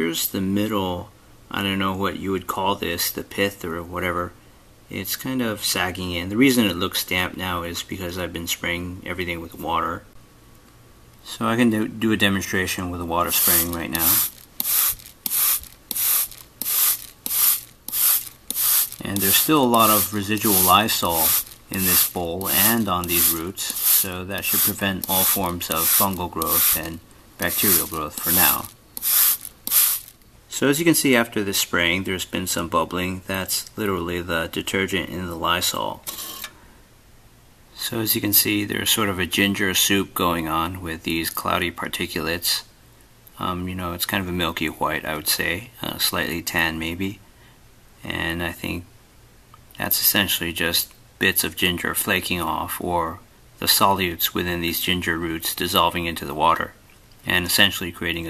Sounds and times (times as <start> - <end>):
Speech: 0.0 - 10.2, 11.2 - 14.3, 19.0 - 28.7, 30.5 - 36.1, 37.8 - 42.7, 43.4 - 47.2, 48.0 - 48.9, 49.8 - 58.2.